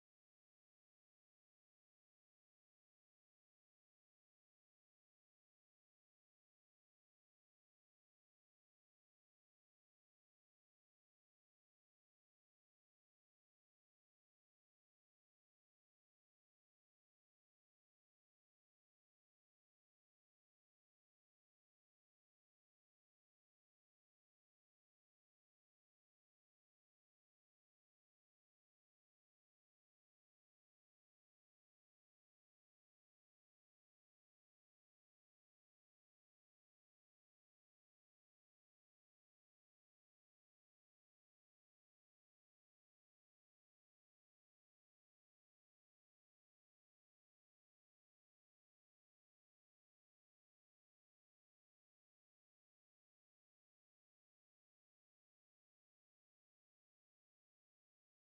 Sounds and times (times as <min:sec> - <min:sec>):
Silence: 0:00.0 - 0:58.2.